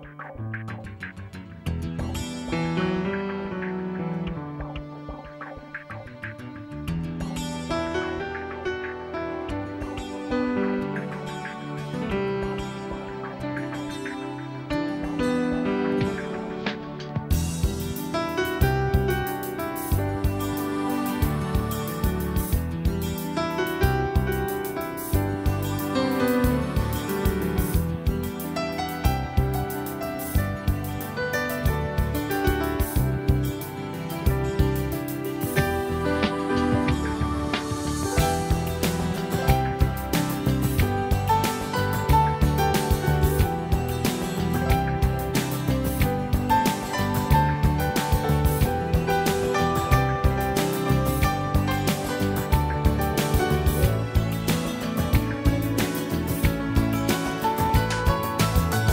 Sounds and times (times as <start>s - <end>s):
Music: 0.0s - 58.9s.